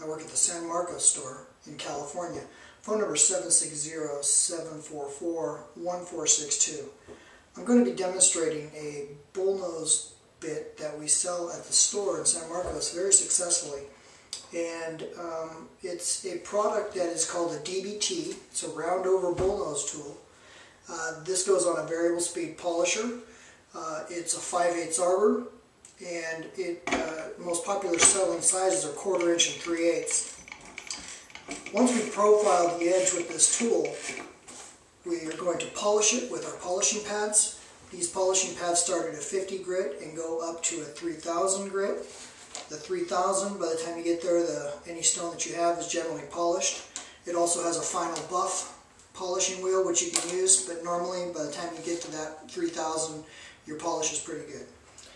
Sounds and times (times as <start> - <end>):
Speech: 0.0 - 7.0, 7.6 - 20.2, 20.9 - 30.4, 31.6 - 34.2, 35.0 - 54.8
Tools: 27.8 - 34.4.